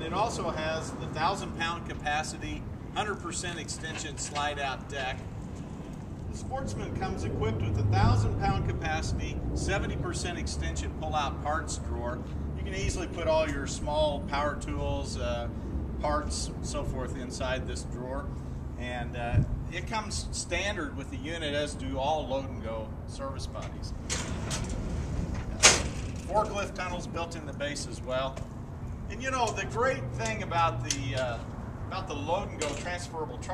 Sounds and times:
Speech: 0.0s - 5.2s, 6.3s - 24.0s, 26.2s - 28.4s, 29.1s - 33.5s.

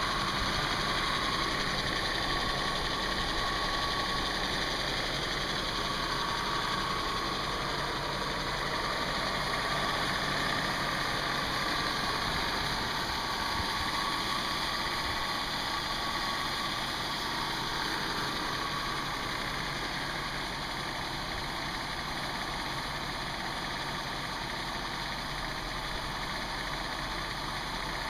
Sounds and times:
Heavy engine (low frequency): 0.0s - 28.0s
Idling: 0.0s - 28.0s
Vehicle: 0.0s - 28.0s.

